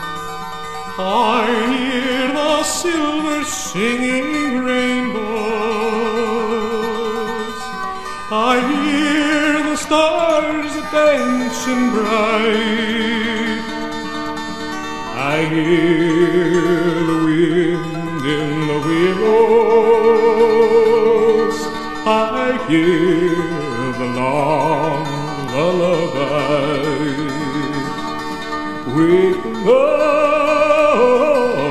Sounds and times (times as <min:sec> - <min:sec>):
Music: 0:00.0 - 0:31.7.